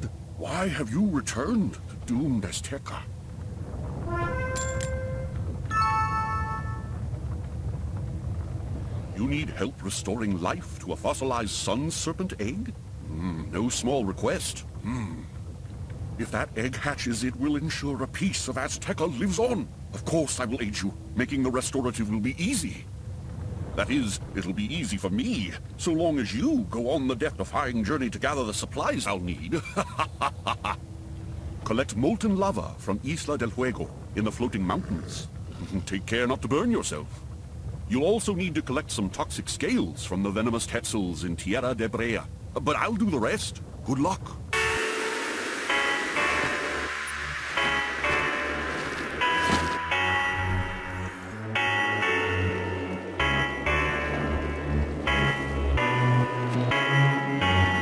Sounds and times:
Speech: 0.0s - 3.1s, 9.2s - 15.3s, 16.2s - 22.9s, 23.8s - 29.8s, 31.6s - 37.1s, 37.9s - 44.4s
Music: 4.0s - 7.0s, 44.6s - 57.8s.

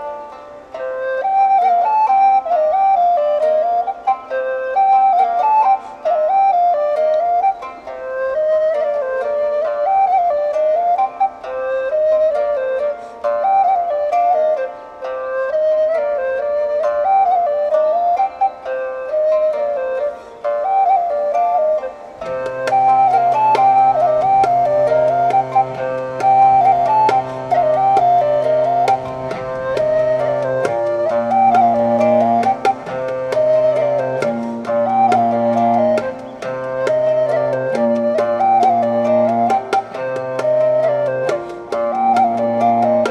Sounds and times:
Music: 0.0s - 43.1s.

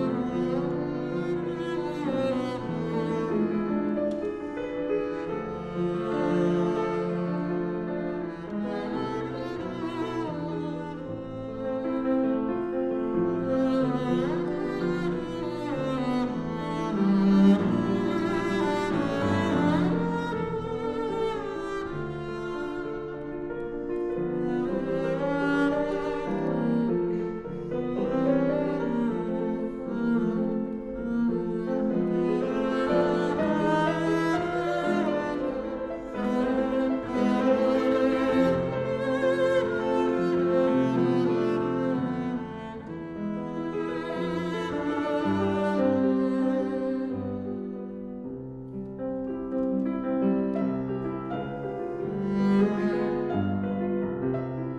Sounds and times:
Cello: 0.0s - 54.7s.

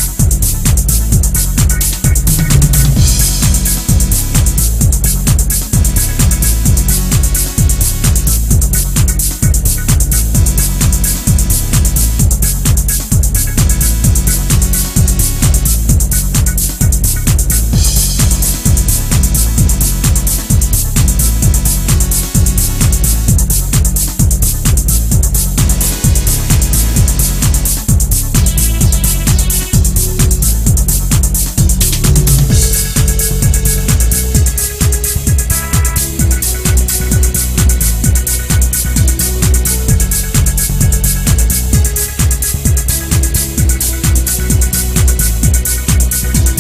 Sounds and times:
Music: 0.0s - 46.6s.

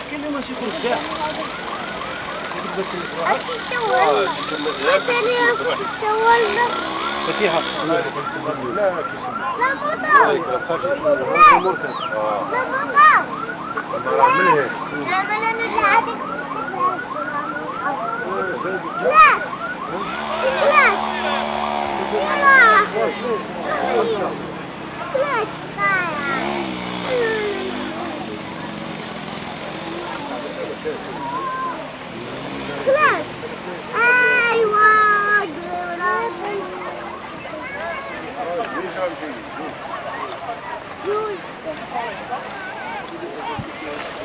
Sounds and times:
Outside, rural or natural: 0.0s - 44.2s.

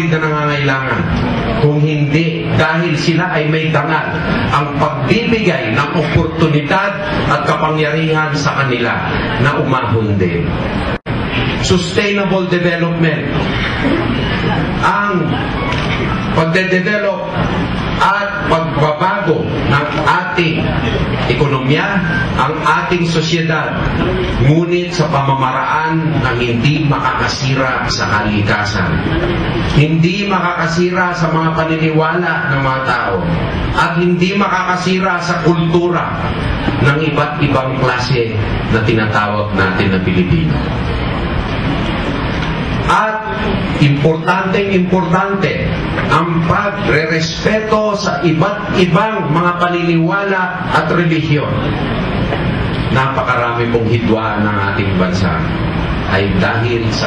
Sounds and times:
Male speech, man speaking: 0.0s - 10.5s, 11.6s - 13.4s, 14.8s - 15.4s, 16.4s - 17.4s, 18.0s - 29.0s, 29.8s - 40.6s, 42.9s - 51.6s, 52.9s - 55.5s, 56.1s - 57.0s
Narration, monologue: 0.0s - 13.9s, 14.6s - 41.3s, 42.2s - 57.0s.

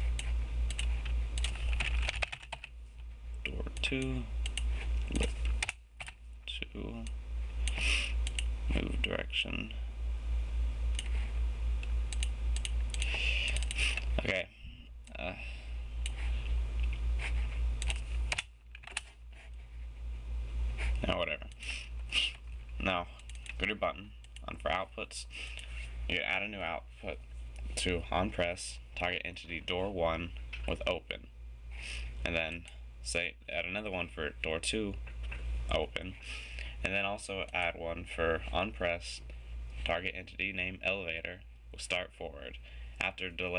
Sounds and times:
Computer keyboard: 0.2s - 2.7s, 17.8s - 19.1s, 23.2s - 23.6s
Speech: 3.4s - 4.3s, 5.1s - 5.4s, 6.5s - 7.1s, 8.7s - 9.8s, 14.2s - 15.5s, 21.0s - 21.5s, 22.8s - 25.3s, 26.1s - 27.2s, 27.8s - 31.3s, 32.2s - 35.0s, 35.7s - 36.2s, 36.8s - 43.5s.

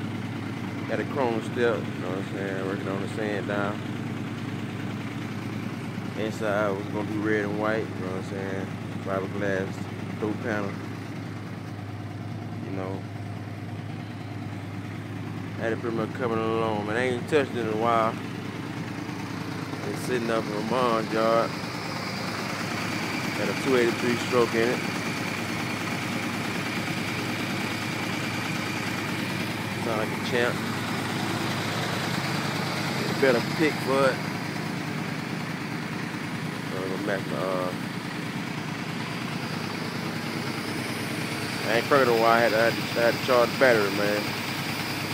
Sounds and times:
Vehicle: 0.0s - 45.1s
Speech: 0.8s - 3.8s, 6.2s - 10.8s, 12.6s - 13.1s, 15.6s - 18.2s, 19.8s - 21.5s, 23.4s - 24.9s, 29.8s - 30.6s, 33.0s - 34.2s, 36.7s - 37.8s, 41.6s - 44.3s.

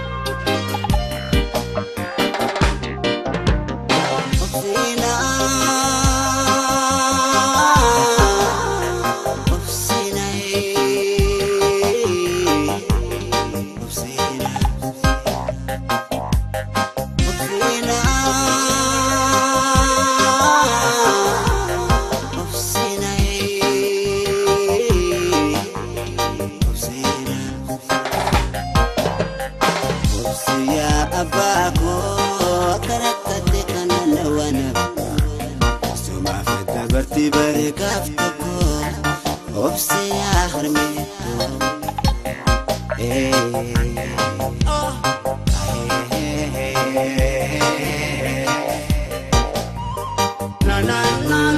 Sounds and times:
Music: 0.0s - 51.5s.

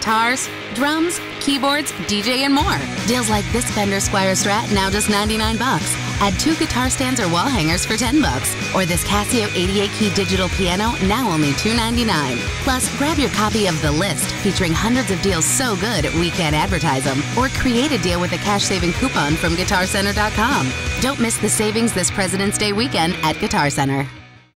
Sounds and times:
Speech: 0.0s - 24.1s
Electric guitar: 0.0s - 24.2s.

